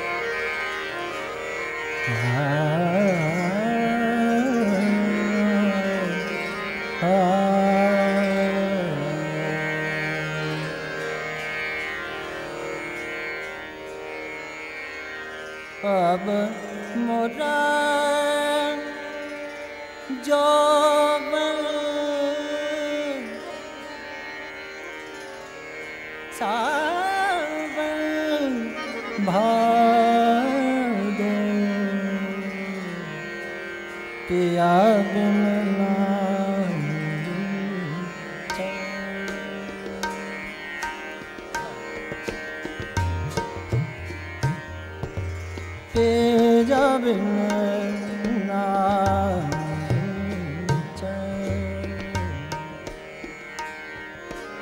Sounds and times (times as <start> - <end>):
Tabla: 0.0 - 14.3, 15.8 - 24.0, 26.3 - 54.6.